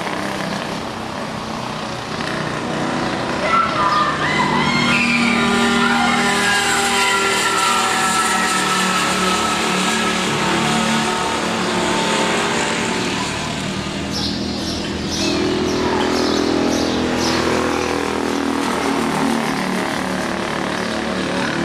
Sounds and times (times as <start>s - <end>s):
Race car, auto racing: 0.0s - 21.6s.